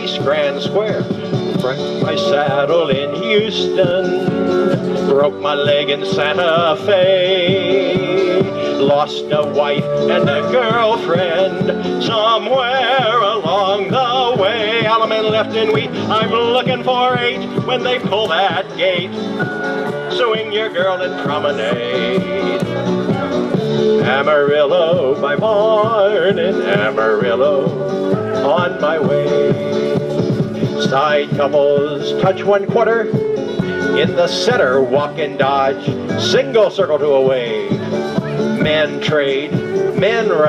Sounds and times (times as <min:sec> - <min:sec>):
Male singing: 0:00.0 - 0:19.1, 0:20.1 - 0:33.2, 0:33.8 - 0:40.4
Music: 0:00.0 - 0:40.4.